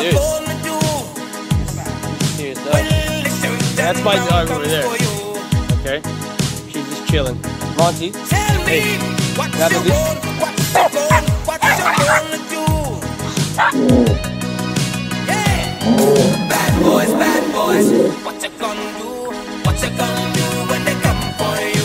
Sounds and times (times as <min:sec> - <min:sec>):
Music: 0:00.0 - 0:21.8
Bow-wow: 0:10.8 - 0:12.3, 0:13.6 - 0:14.2
Yip: 0:10.8 - 0:12.3, 0:13.6 - 0:14.2.